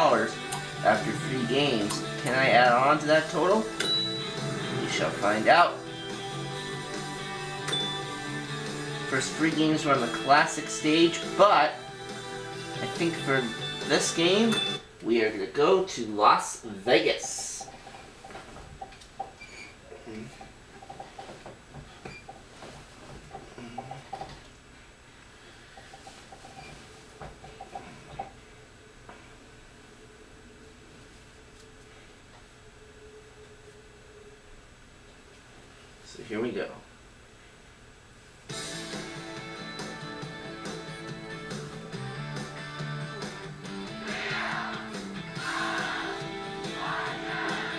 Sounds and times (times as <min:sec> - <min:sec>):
Speech: 0:00.0 - 0:03.7, 0:04.8 - 0:05.8, 0:09.1 - 0:11.8, 0:12.8 - 0:17.7, 0:36.0 - 0:36.9.